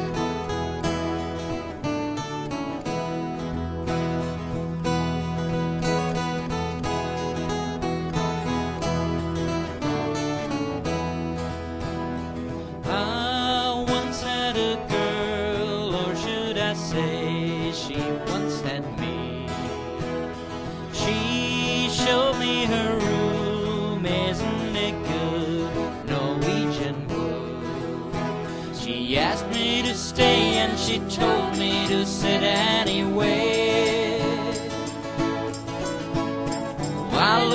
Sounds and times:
Music: 0.0s - 37.5s.

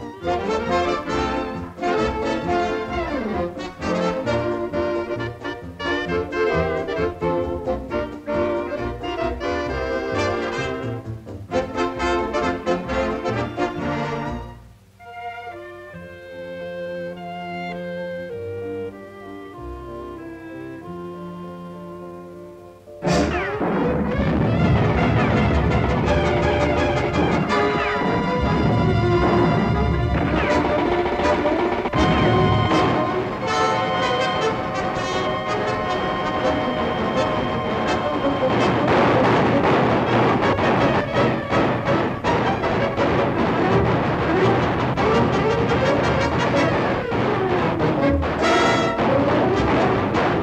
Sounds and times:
Music: 0.0s - 50.4s.

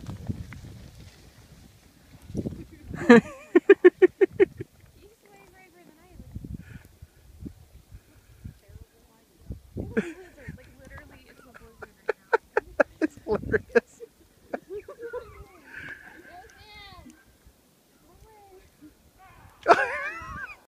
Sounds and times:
Speech: 5.0s - 6.3s, 10.3s - 12.3s.

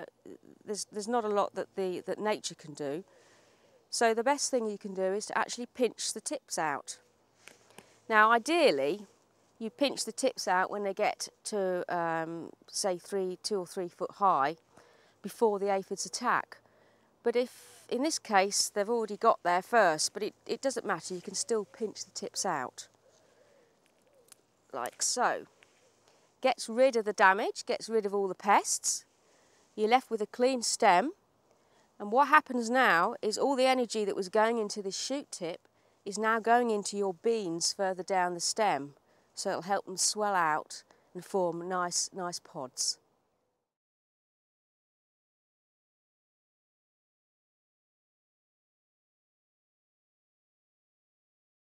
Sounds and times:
Speech: 0.0s - 3.0s, 3.9s - 7.0s, 8.1s - 14.6s, 15.3s - 16.6s, 17.3s - 22.8s, 24.8s - 25.5s, 26.4s - 29.0s, 29.8s - 31.2s, 32.0s - 43.0s.

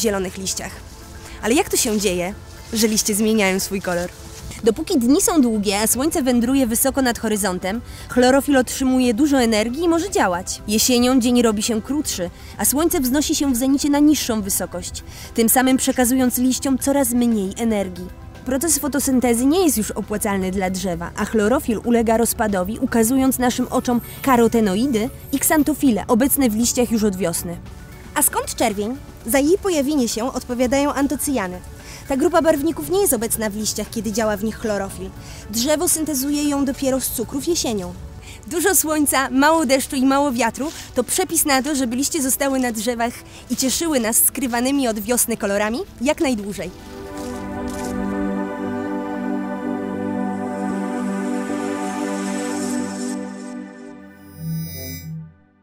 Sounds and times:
Speech: 0.0s - 0.8s, 1.4s - 27.6s, 28.2s - 46.7s
Music: 0.0s - 55.6s.

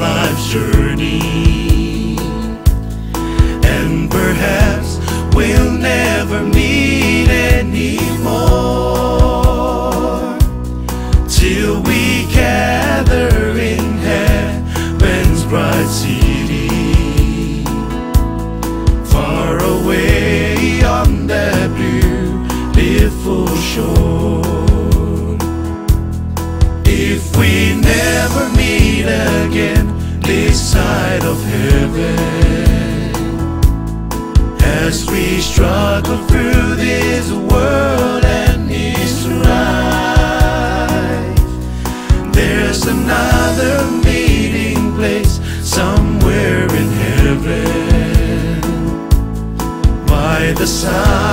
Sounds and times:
Singing: 0.0s - 2.5s, 3.6s - 10.6s, 11.3s - 17.7s, 19.1s - 25.4s, 26.9s - 33.3s, 34.6s - 41.5s, 42.2s - 49.0s, 50.1s - 51.3s.

